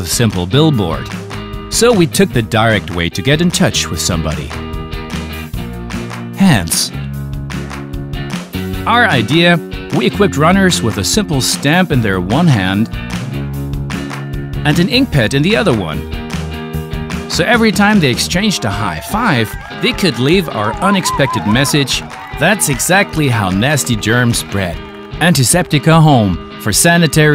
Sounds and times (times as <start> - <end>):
Speech: 0.0 - 1.1, 1.7 - 4.6, 6.4 - 7.0, 8.9 - 12.9, 14.6 - 16.0, 17.3 - 27.3
Music: 0.0 - 27.3.